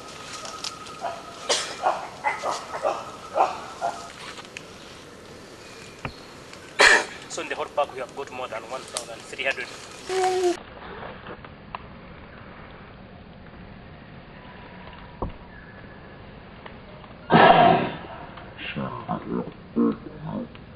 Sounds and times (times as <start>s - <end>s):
Animal: 0.2s - 4.4s, 17.3s - 20.6s.